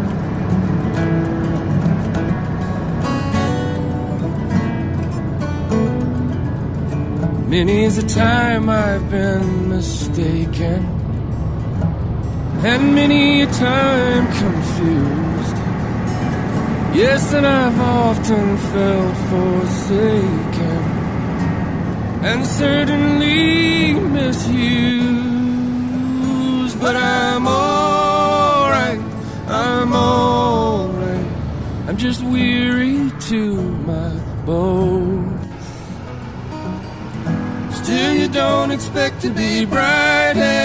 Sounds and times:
Music: 0.0s - 40.6s
Truck: 0.0s - 40.6s.

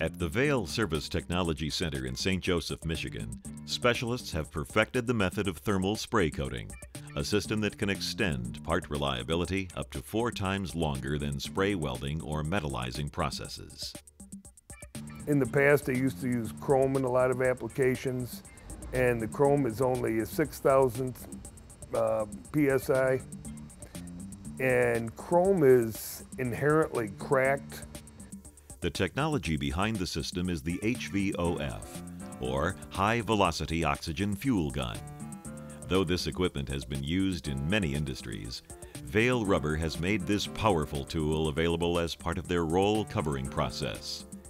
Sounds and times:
Speech: 0.0s - 14.0s, 15.3s - 23.2s, 24.6s - 27.9s, 28.8s - 35.1s, 35.9s - 44.3s
Music: 0.0s - 44.4s.

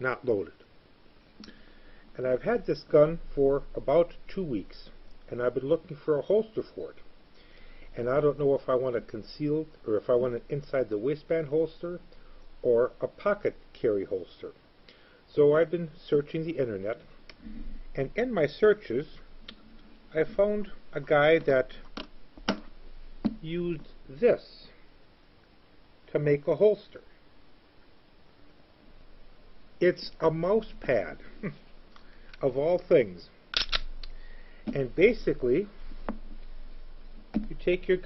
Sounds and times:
Speech: 0.0s - 0.6s, 2.2s - 7.0s, 8.0s - 12.0s, 12.6s - 14.6s, 15.3s - 17.0s, 18.0s - 19.2s, 20.1s - 21.8s, 23.4s - 24.8s, 26.1s - 27.1s, 29.8s - 31.3s, 32.4s - 33.3s, 34.7s - 35.7s, 37.4s - 38.0s.

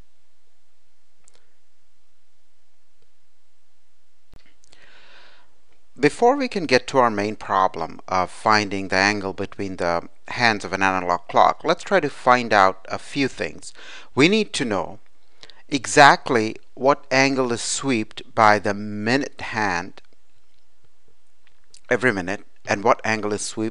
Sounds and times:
Speech: 6.0s - 15.0s, 15.7s - 20.0s, 21.8s - 23.7s.

